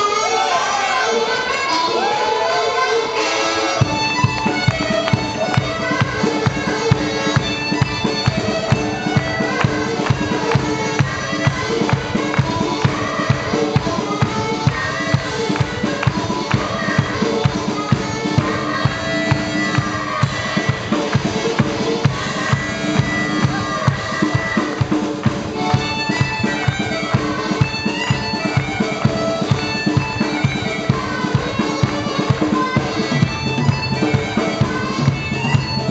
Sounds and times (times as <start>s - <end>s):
Harmonica: 0.0s - 35.9s.